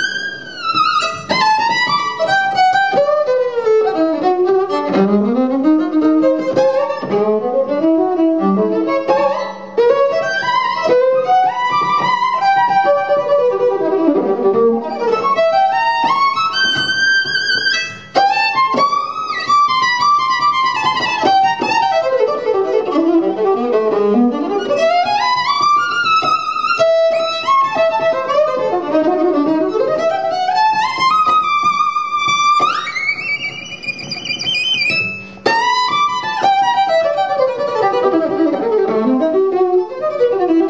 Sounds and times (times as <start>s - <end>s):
Violin, fiddle: 0.0s - 40.7s.